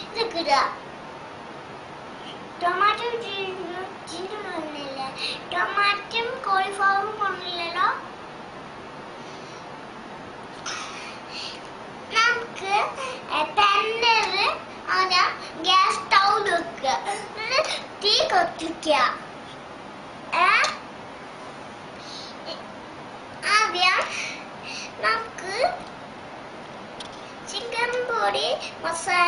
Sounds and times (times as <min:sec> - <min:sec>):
Speech: 0:00.0 - 0:00.8, 0:02.6 - 0:08.1, 0:12.1 - 0:19.2, 0:20.3 - 0:20.8, 0:23.4 - 0:24.1, 0:25.0 - 0:25.8, 0:27.5 - 0:29.2.